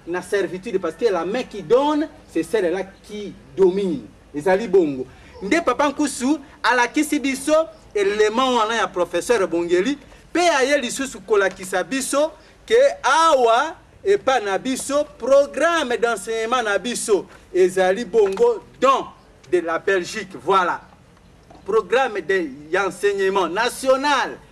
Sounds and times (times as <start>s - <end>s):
Speech: 0.0s - 20.9s, 21.7s - 24.4s.